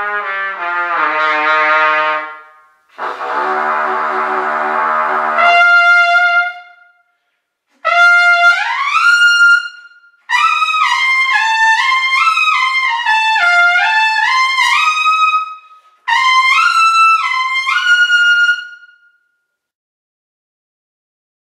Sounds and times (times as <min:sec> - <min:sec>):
Trumpet: 0:00.0 - 0:19.4.